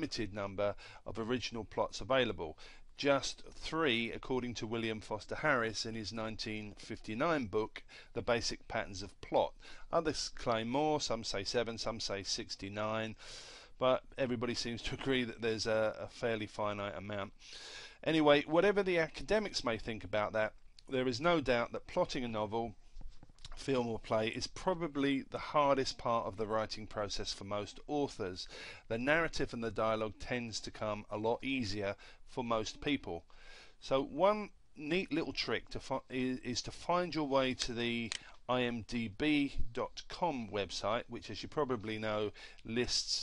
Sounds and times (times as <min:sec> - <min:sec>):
Speech: 0:00.0 - 0:13.2, 0:13.8 - 0:17.4, 0:18.0 - 0:22.8, 0:23.5 - 0:33.2, 0:33.8 - 0:43.2.